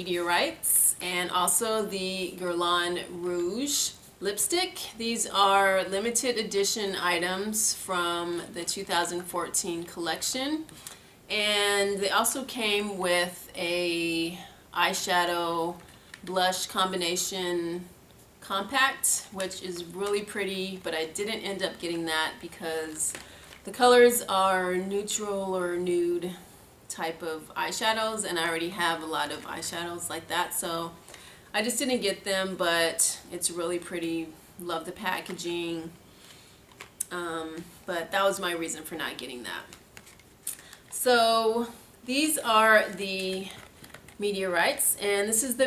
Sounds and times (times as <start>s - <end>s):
Speech: 0.0s - 10.7s, 11.3s - 31.0s, 31.6s - 36.0s, 37.0s - 39.7s, 41.0s - 43.6s, 44.2s - 45.6s.